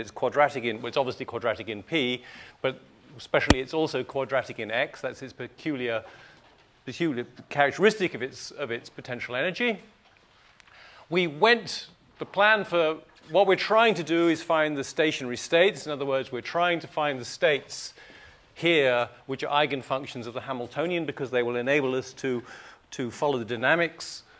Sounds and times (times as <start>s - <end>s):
Speech: 0.0s - 6.0s, 6.8s - 9.9s, 11.1s - 18.0s, 18.6s - 24.3s.